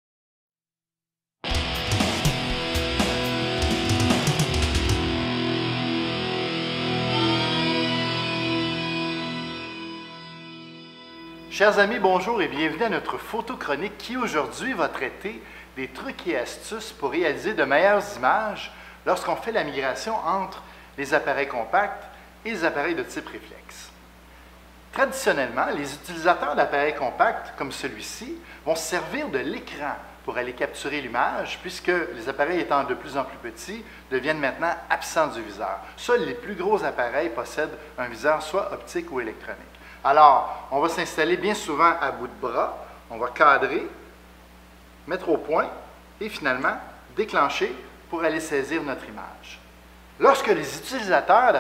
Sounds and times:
Speech: 0:11.5 - 0:24.0, 0:24.9 - 0:44.1, 0:45.1 - 0:51.6.

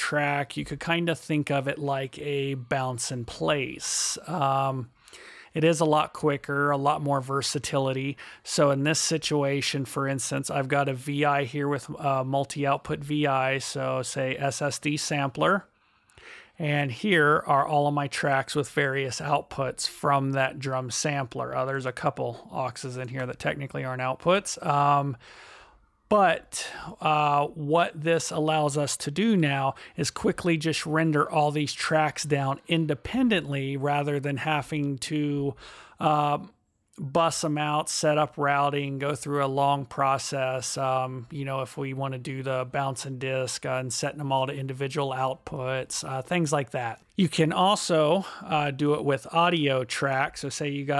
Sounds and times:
Speech: 0:00.0 - 0:04.9, 0:05.5 - 0:15.7, 0:16.6 - 0:25.2, 0:26.1 - 0:50.9.

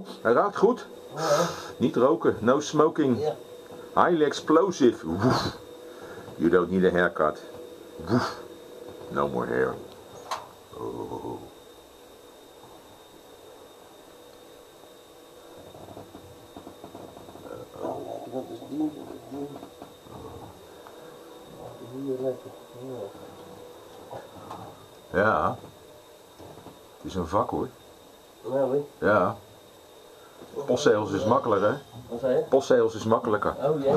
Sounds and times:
Speech: 0:04.0 - 0:05.4, 0:06.4 - 0:07.4, 0:30.6 - 0:33.9.

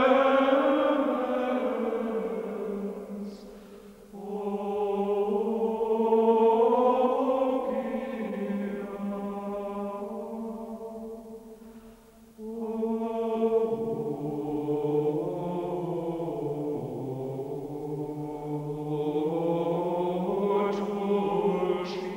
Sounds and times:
Mantra: 0:00.0 - 0:11.6, 0:12.4 - 0:22.1.

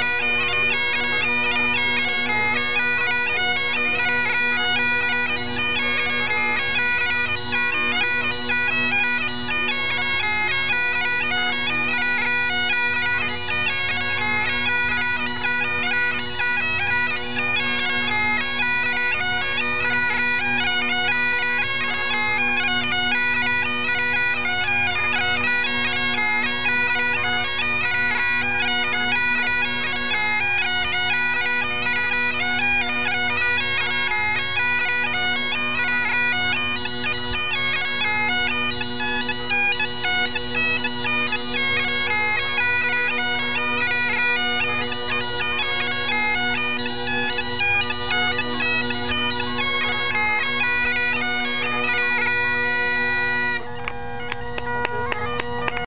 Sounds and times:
Bagpipes: 0:00.0 - 0:55.8
Wind instrument, woodwind instrument: 0:00.0 - 0:55.8.

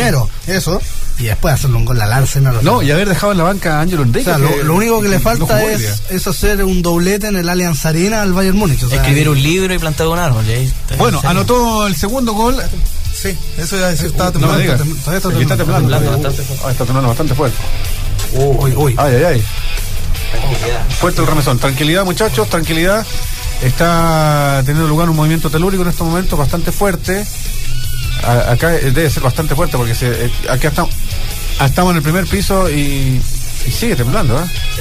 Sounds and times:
Speech: 0:00.0 - 0:17.6, 0:18.2 - 0:19.5, 0:20.3 - 0:27.3, 0:28.2 - 0:31.0, 0:31.6 - 0:34.6
Music: 0:00.0 - 0:34.8.

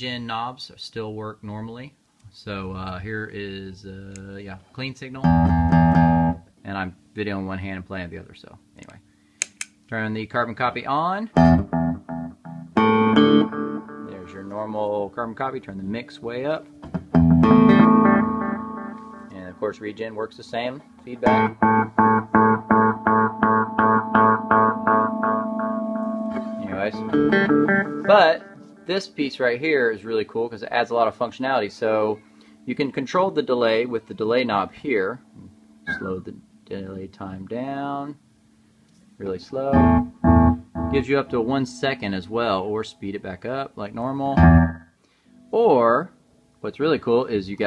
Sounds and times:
Speech: 0:00.0 - 0:05.4, 0:06.6 - 0:09.0, 0:09.9 - 0:11.4, 0:14.1 - 0:16.7, 0:19.3 - 0:21.6, 0:26.6 - 0:27.1, 0:28.1 - 0:38.2, 0:39.2 - 0:39.8, 0:41.0 - 0:44.4, 0:45.5 - 0:47.6
Music: 0:05.2 - 0:06.4, 0:11.4 - 0:14.6, 0:16.6 - 0:29.1, 0:39.7 - 0:43.2, 0:44.4 - 0:46.6.

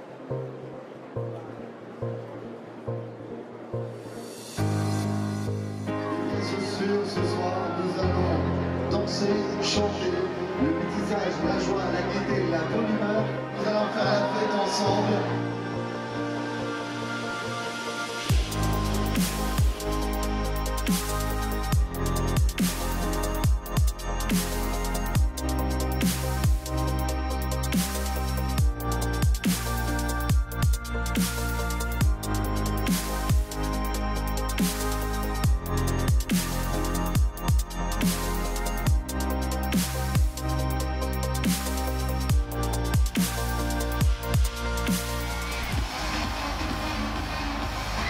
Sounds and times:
Music: 0:00.0 - 0:48.1.

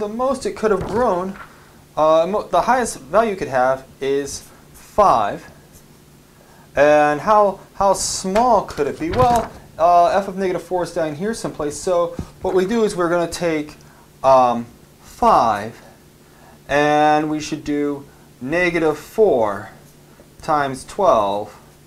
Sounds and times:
Speech: 0:00.0 - 0:01.4, 0:02.0 - 0:05.6, 0:06.8 - 0:15.9, 0:16.7 - 0:19.8, 0:20.4 - 0:21.7
Inside, small room: 0:00.0 - 0:21.8.

